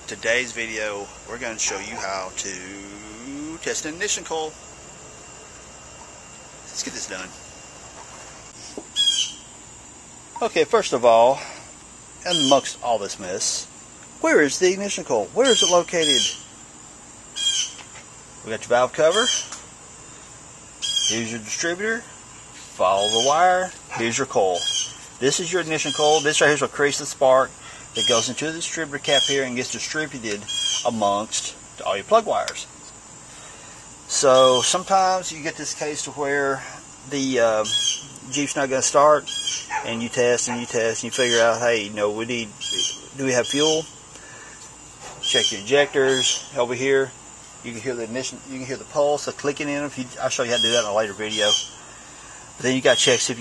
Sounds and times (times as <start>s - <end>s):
Speech: 0.0s - 4.6s, 6.7s - 7.4s, 10.4s - 11.6s, 12.2s - 16.4s, 18.4s - 19.4s, 21.1s - 22.1s, 22.8s - 32.7s, 34.1s - 43.9s, 45.3s - 51.6s, 52.6s - 53.4s
Outside, urban or manmade: 0.0s - 53.4s.